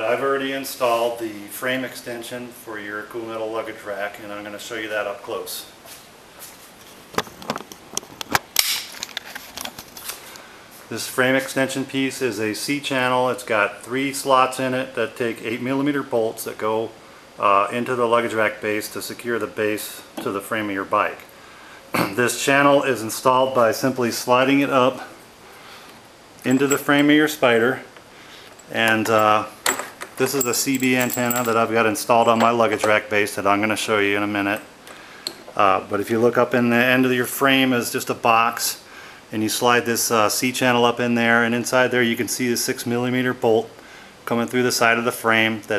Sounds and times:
Speech: 0.0 - 5.8, 10.9 - 21.3, 22.0 - 25.2, 26.4 - 27.9, 28.7 - 29.6, 30.2 - 34.7, 35.6 - 45.7.

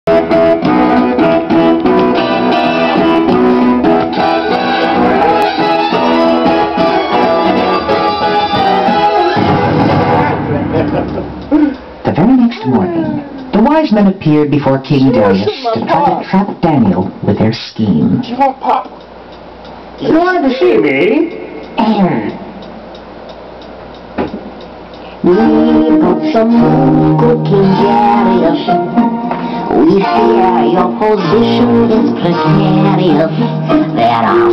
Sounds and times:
Electronic organ: 0.1 - 11.4.

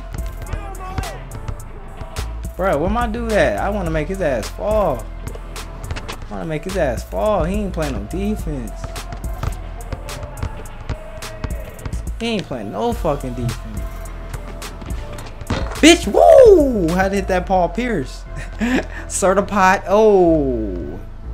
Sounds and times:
Music: 0.0 - 21.3
Speech: 0.5 - 1.2, 2.6 - 5.0, 6.3 - 8.8, 12.2 - 13.7, 15.8 - 18.2.

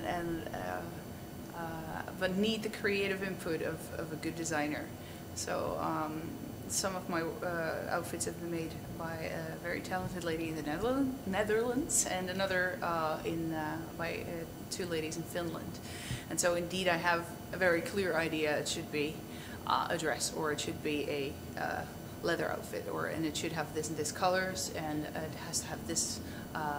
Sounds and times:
Female speech, woman speaking: 0.0 - 1.0, 1.6 - 26.7.

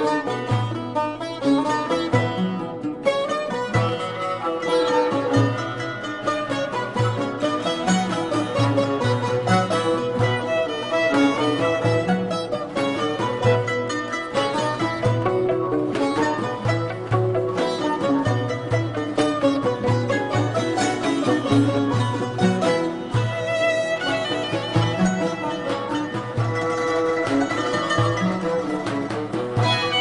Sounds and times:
Folk music: 0.0 - 30.0.

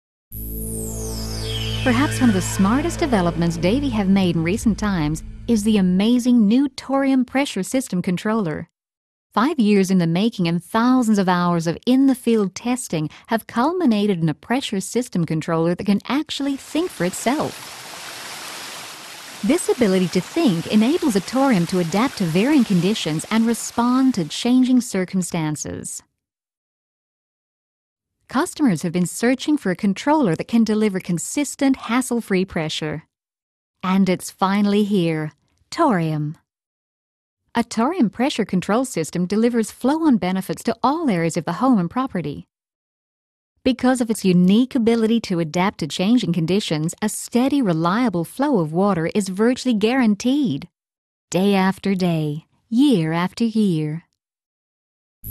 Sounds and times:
Speech: 1.9 - 8.7, 9.4 - 17.6, 19.4 - 26.0, 28.3 - 33.1, 33.8 - 36.4, 37.6 - 42.5, 43.7 - 50.7, 51.3 - 54.1.

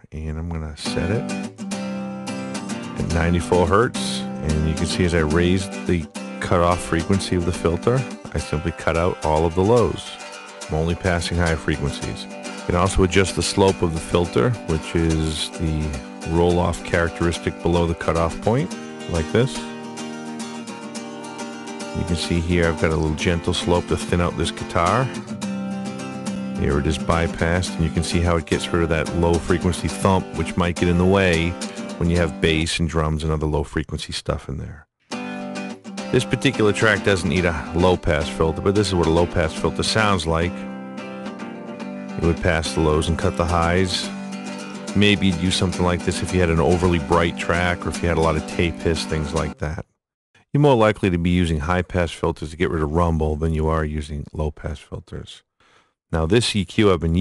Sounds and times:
Speech: 0.0 - 1.3, 3.0 - 19.7, 22.0 - 25.2, 26.6 - 34.9, 36.1 - 40.6, 42.2 - 44.2, 44.9 - 49.9, 50.6 - 55.4, 56.1 - 57.2
Music: 0.5 - 33.4, 35.0 - 49.8.

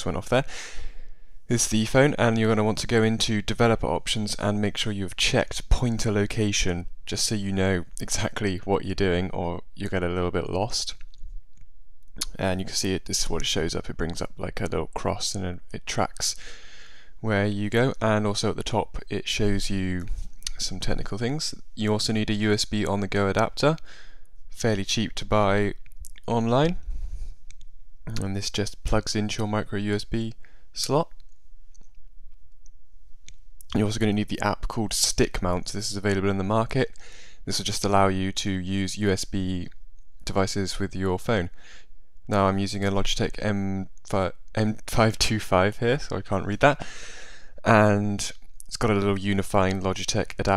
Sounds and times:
Speech: 0.0 - 0.5, 1.5 - 11.0, 12.2 - 16.4, 17.2 - 23.9, 24.6 - 26.8, 28.1 - 31.2, 33.7 - 41.6, 42.3 - 46.8, 47.6 - 50.5.

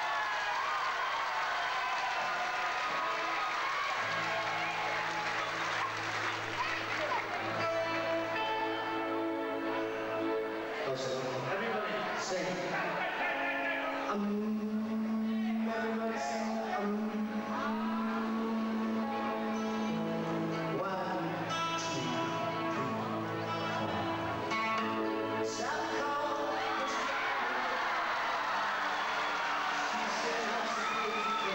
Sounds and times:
Music: 1.5 - 31.5
Speech: 10.8 - 14.2, 29.8 - 31.5.

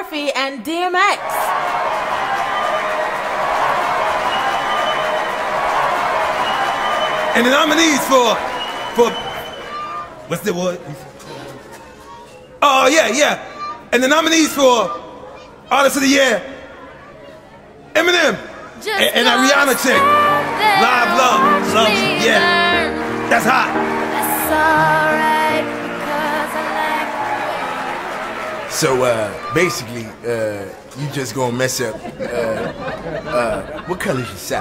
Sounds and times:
Music: 1.5 - 9.7, 19.3 - 29.5.

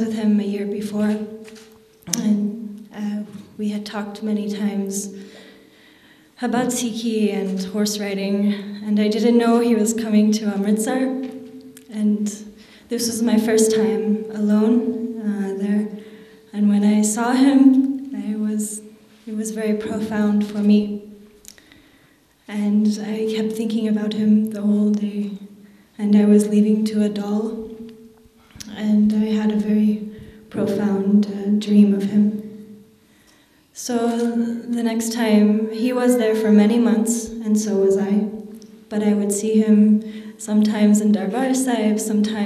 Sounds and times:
Female speech, woman speaking: 0.0 - 1.3, 2.1 - 5.1, 6.4 - 11.3, 11.9 - 15.9, 16.5 - 21.0, 22.5 - 25.4, 26.0 - 27.7, 28.6 - 32.5, 33.8 - 42.4
Narration, monologue: 0.0 - 42.4.

